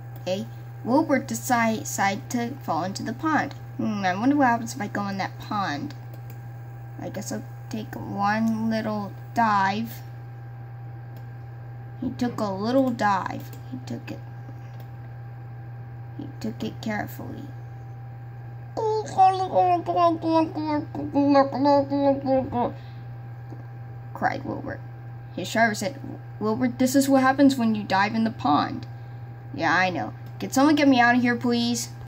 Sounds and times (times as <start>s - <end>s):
Speech: 0.3s - 6.0s, 7.0s - 10.0s, 12.0s - 14.2s, 16.2s - 17.6s, 18.8s - 22.8s, 24.2s - 24.8s, 25.4s - 28.9s, 29.5s - 32.0s.